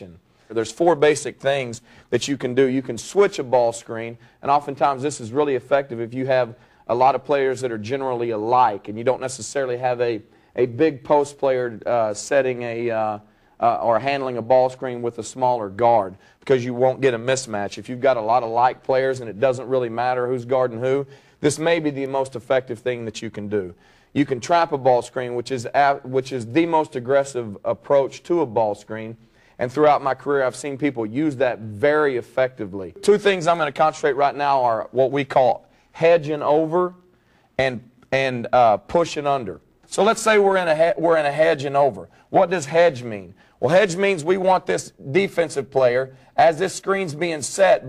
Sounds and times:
Speech: 0:00.0 - 0:37.0, 0:37.6 - 0:47.8.

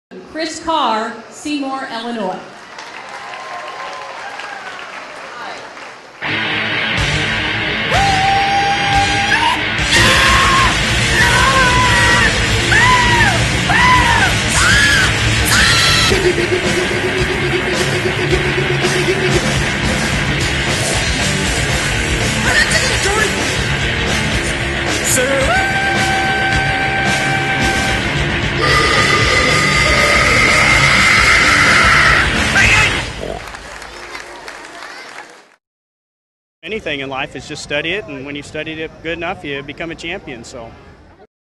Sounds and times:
Applause: 0:02.6 - 0:06.2, 0:33.2 - 0:35.6
Music: 0:06.2 - 0:33.0.

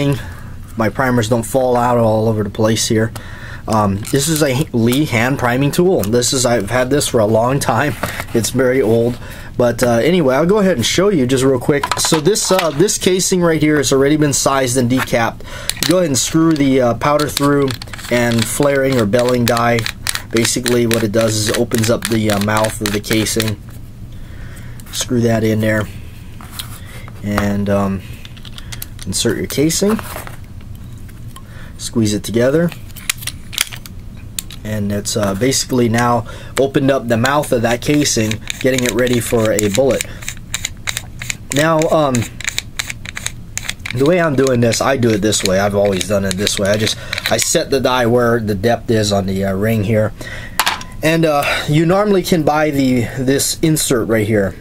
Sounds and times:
Speech: 0:00.0 - 0:00.2, 0:00.8 - 0:23.6, 0:25.0 - 0:25.9, 0:27.2 - 0:28.0, 0:29.0 - 0:30.1, 0:31.8 - 0:32.8, 0:34.6 - 0:40.1, 0:41.6 - 0:42.3, 0:44.0 - 0:50.1, 0:51.0 - 0:54.6
Inside, small room: 0:00.0 - 0:54.6.

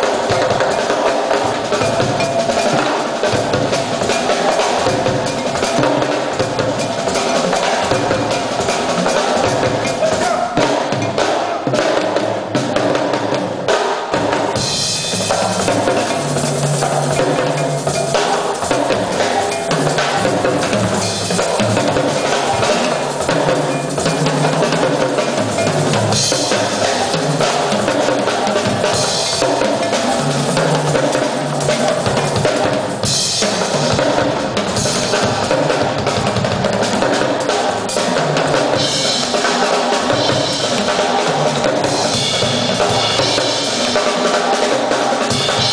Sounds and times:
Drum kit: 0:00.0 - 0:45.7
Drum roll: 0:00.0 - 0:45.7.

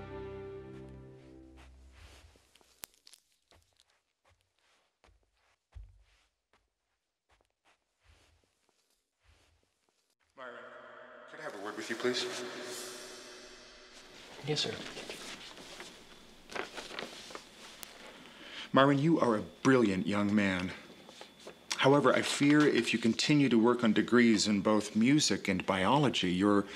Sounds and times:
Speech: 0:10.4 - 0:13.0, 0:14.4 - 0:15.0, 0:18.7 - 0:20.9, 0:21.7 - 0:26.7.

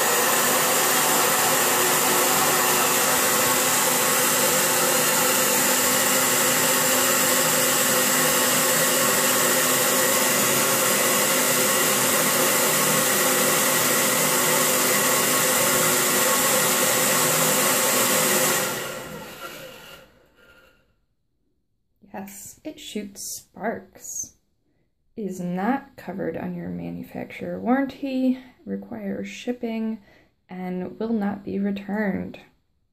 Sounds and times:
Hair dryer: 0:00.0 - 0:20.3.

